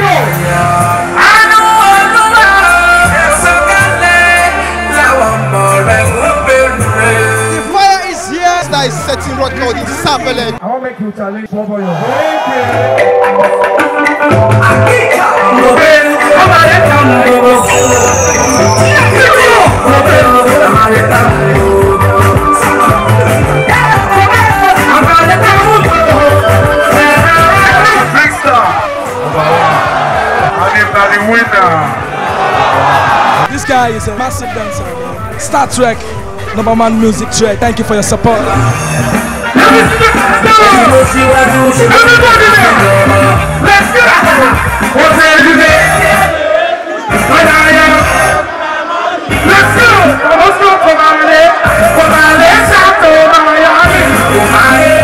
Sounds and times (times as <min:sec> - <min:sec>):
Dance music: 0:00.0 - 0:10.6, 0:12.0 - 0:55.0.